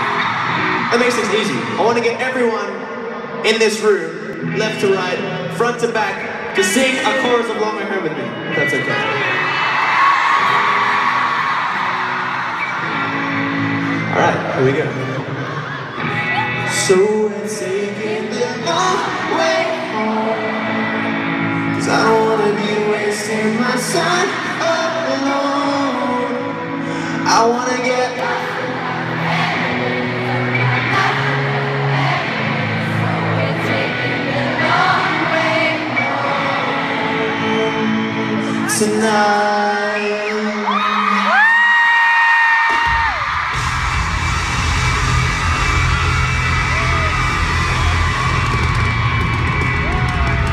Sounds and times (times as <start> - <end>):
Crowd: 0.0 - 50.5
Male singing: 16.7 - 20.9, 21.7 - 28.7, 34.6 - 41.4
Choir: 17.5 - 21.1, 28.1 - 39.8.